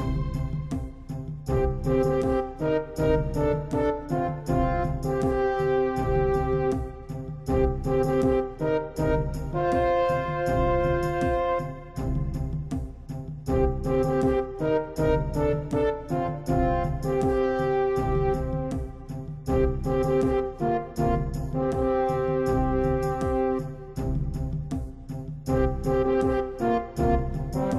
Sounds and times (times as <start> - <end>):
Music: 0.0 - 27.7.